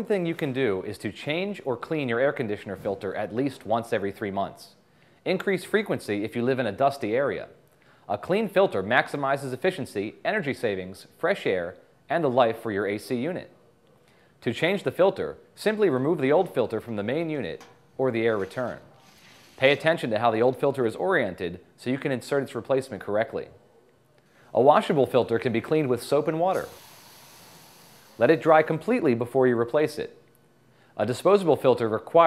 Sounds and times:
Speech: 0:00.0 - 0:13.6, 0:14.4 - 0:19.0, 0:19.6 - 0:23.7, 0:24.5 - 0:26.8, 0:28.2 - 0:30.2, 0:31.0 - 0:32.2.

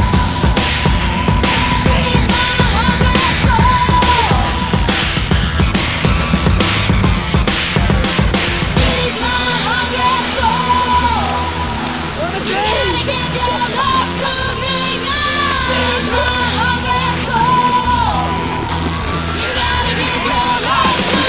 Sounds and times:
Music: 0:00.0 - 0:21.2
Speech: 0:12.2 - 0:17.3.

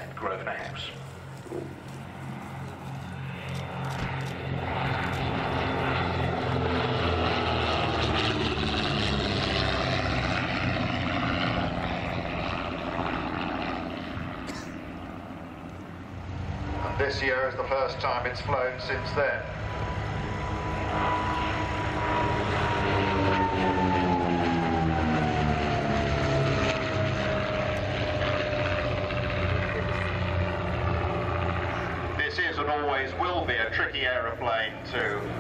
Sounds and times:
Speech: 0:00.0 - 0:01.0, 0:16.8 - 0:19.5, 0:32.2 - 0:35.3
Fixed-wing aircraft, airplane: 0:00.0 - 0:35.4
Propeller, airscrew: 0:00.0 - 0:35.4.

